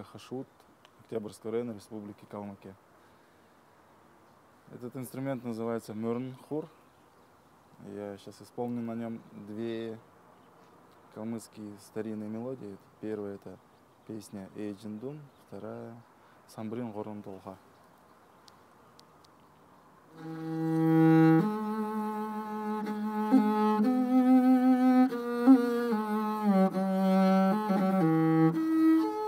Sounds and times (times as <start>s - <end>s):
Speech: 0.0s - 2.8s, 4.7s - 6.8s, 7.8s - 10.0s, 11.1s - 17.6s
Violin, fiddle: 20.2s - 29.2s.